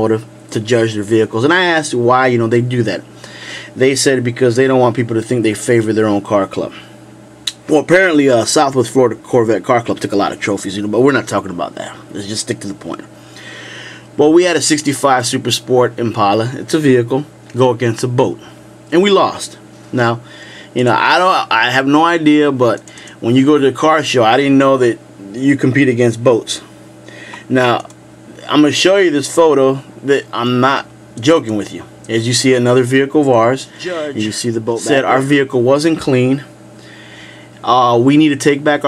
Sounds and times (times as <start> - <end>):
Speech: 0.0 - 3.0, 3.8 - 6.9, 7.5 - 13.1, 14.2 - 20.2, 20.8 - 26.7, 27.5 - 36.5, 37.6 - 38.8.